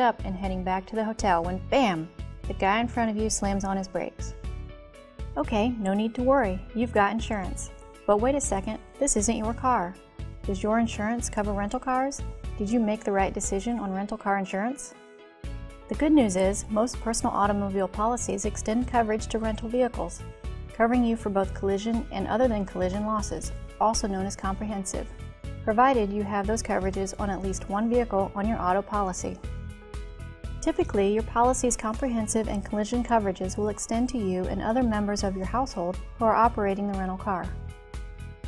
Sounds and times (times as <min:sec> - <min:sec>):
Speech: 0:00.0 - 0:04.3, 0:05.4 - 0:14.9, 0:15.9 - 0:20.2, 0:20.8 - 0:25.1, 0:25.7 - 0:29.4, 0:30.6 - 0:37.6
Music: 0:00.0 - 0:38.4.